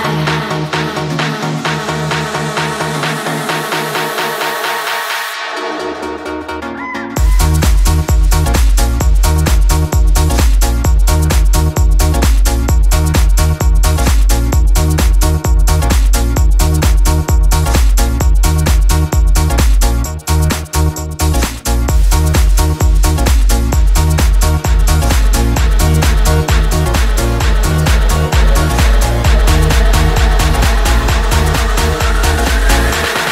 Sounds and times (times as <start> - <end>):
Disco: 0.0 - 33.3.